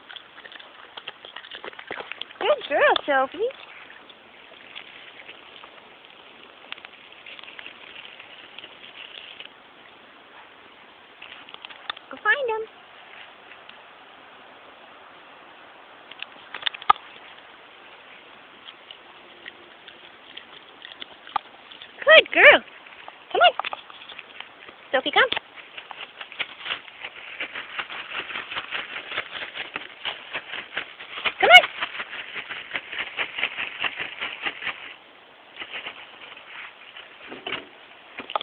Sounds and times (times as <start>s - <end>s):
Speech: 2.4s - 3.6s, 12.1s - 12.7s, 22.0s - 22.6s, 23.3s - 23.6s, 24.9s - 25.4s, 31.4s - 31.7s.